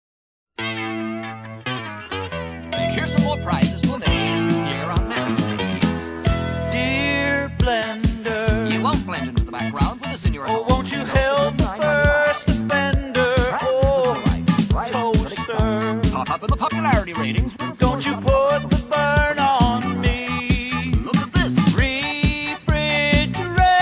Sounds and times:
Funk: 0:00.6 - 0:23.8
Speech: 0:02.8 - 0:06.1, 0:06.7 - 0:18.7, 0:19.6 - 0:23.8.

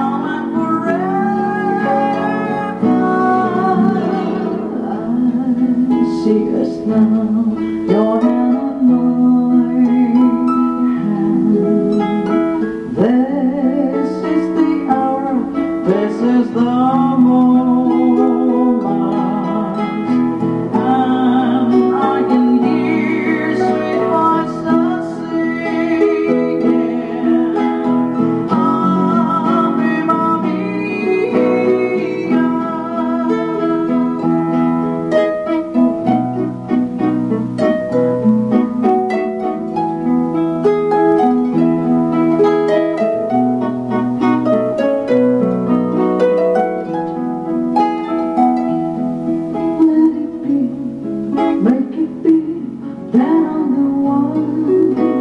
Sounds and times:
Singing: 0:00.0 - 0:12.0, 0:12.8 - 0:34.4
Guitar: 0:00.0 - 0:55.2
Harp: 0:00.0 - 0:55.2.

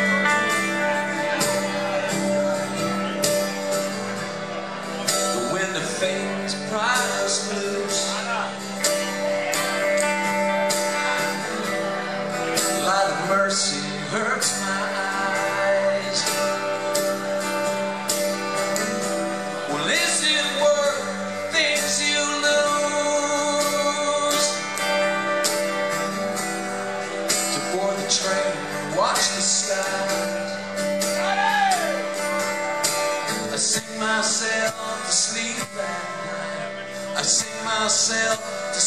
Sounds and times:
Music: 0:00.0 - 0:38.8
Speech: 0:04.9 - 0:09.8.

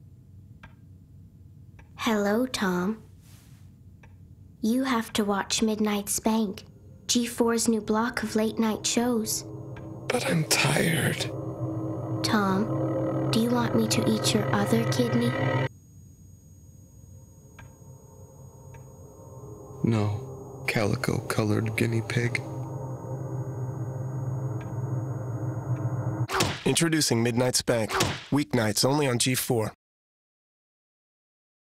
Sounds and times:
Music: 0:06.0 - 0:15.7, 0:17.0 - 0:26.3
Speech: 0:10.1 - 0:11.3, 0:13.4 - 0:15.4, 0:19.8 - 0:22.4, 0:26.7 - 0:29.8
Thump, thud: 0:26.3 - 0:26.7, 0:28.0 - 0:28.3.

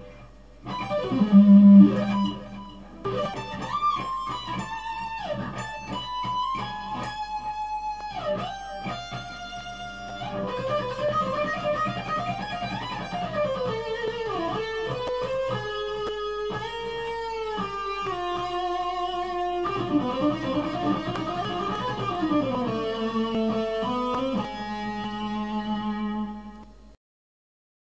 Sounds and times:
Guitar: 0:00.0 - 0:27.0.

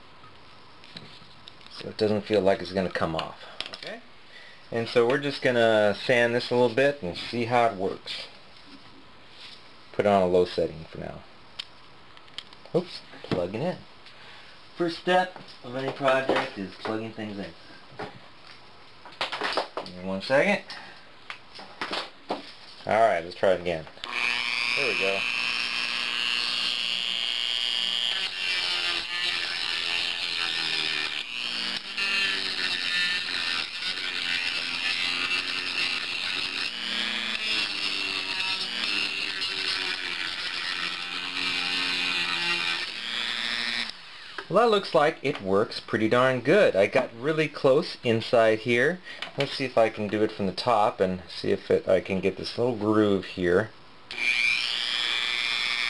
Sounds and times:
Speech: 0:01.7 - 0:04.0, 0:04.7 - 0:08.3, 0:10.0 - 0:11.3, 0:12.7 - 0:13.8, 0:14.8 - 0:17.6, 0:19.8 - 0:20.7, 0:22.8 - 0:23.9, 0:24.8 - 0:25.2, 0:44.5 - 0:53.7.

